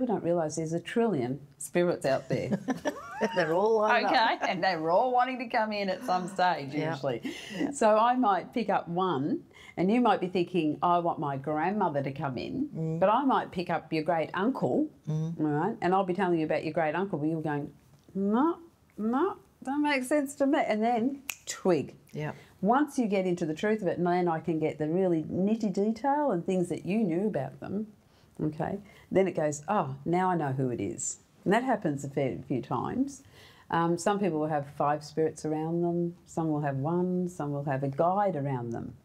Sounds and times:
Conversation: 0.0s - 39.0s
Female speech, woman speaking: 0.0s - 39.0s.

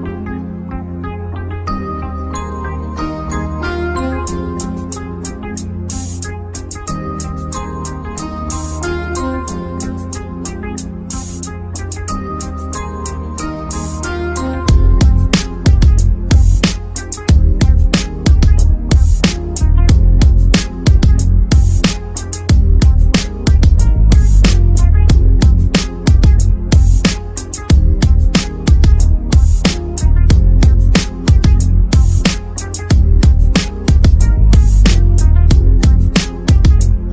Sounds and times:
Music: 0.0s - 37.1s.

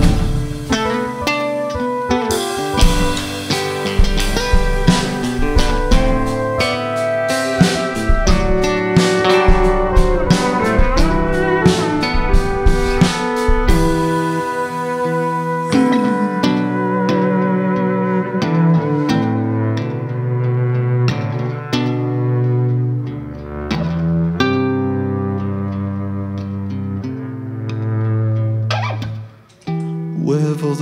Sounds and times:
Steel guitar, slide guitar: 0.0s - 30.2s.

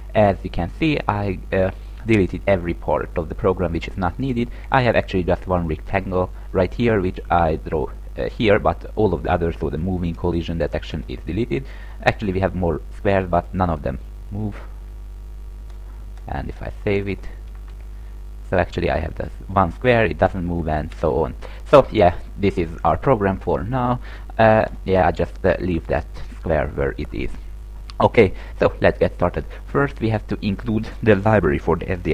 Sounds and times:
Speech: 0.1s - 14.7s, 16.2s - 17.4s, 18.5s - 32.1s.

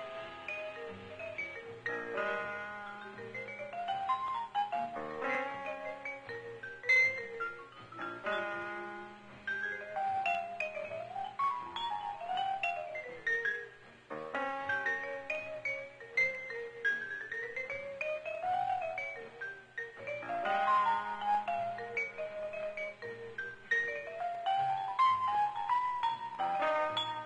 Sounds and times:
Music: 0.0s - 27.2s.

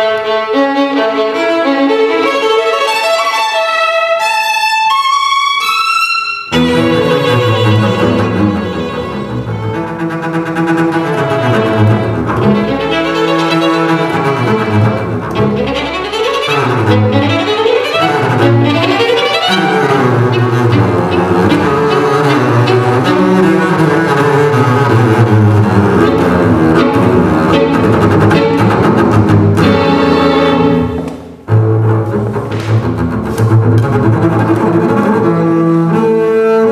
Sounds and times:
Violin, fiddle: 0.0s - 32.2s
Cello: 0.0s - 36.7s
Double bass: 6.5s - 36.7s.

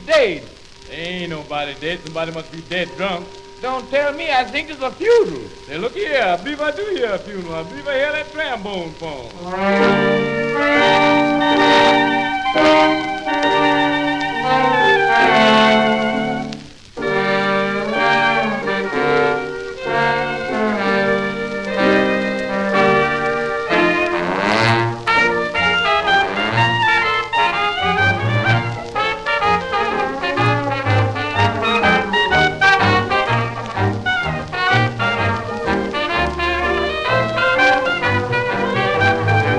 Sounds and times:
Trombone: 9.3s - 39.5s.

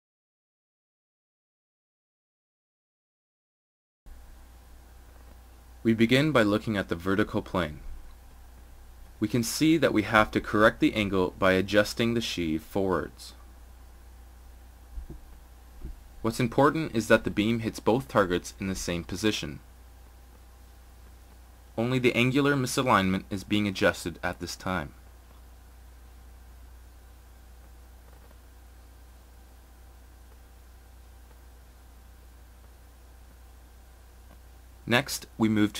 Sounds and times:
Speech: 5.8s - 8.0s, 9.2s - 13.4s, 16.2s - 19.7s, 21.8s - 25.0s, 34.8s - 35.7s.

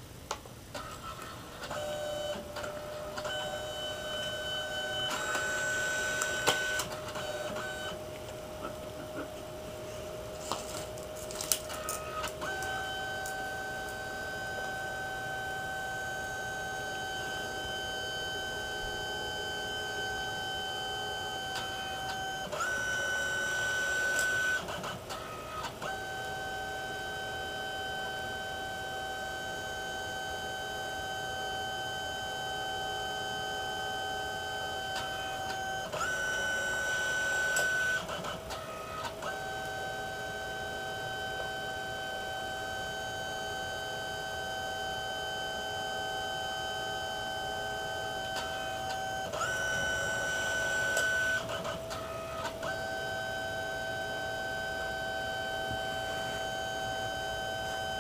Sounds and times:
Printer: 0.0s - 58.0s.

